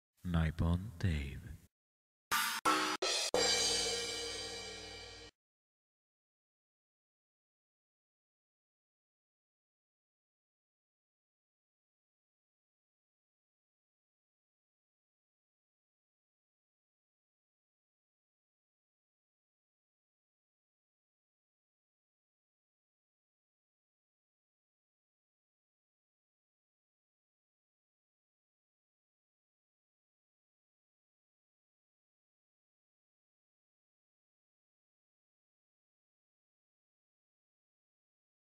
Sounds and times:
Speech: 0:00.2 - 0:01.7
Music: 0:02.3 - 0:05.3.

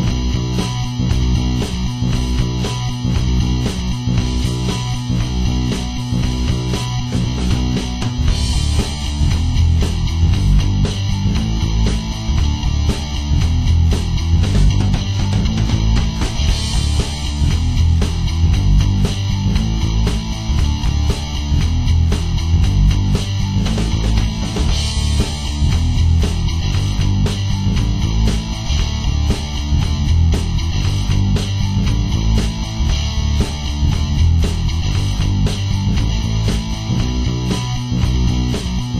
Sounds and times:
Rock music: 0:00.0 - 0:38.9.

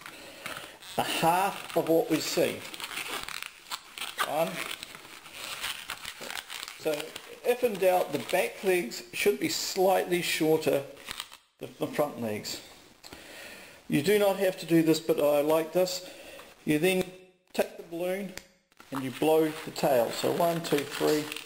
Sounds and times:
Inside, small room: 0:00.0 - 0:21.4
Speech: 0:01.0 - 0:02.8, 0:04.2 - 0:04.7, 0:06.8 - 0:10.9, 0:11.6 - 0:12.7, 0:13.9 - 0:21.4.

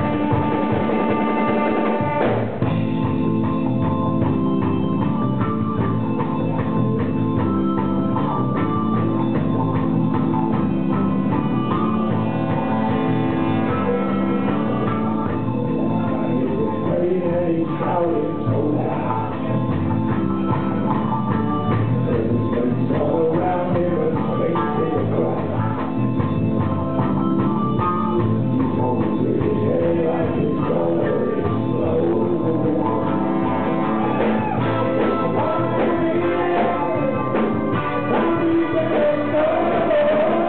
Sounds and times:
Music: 0:00.0 - 0:40.4.

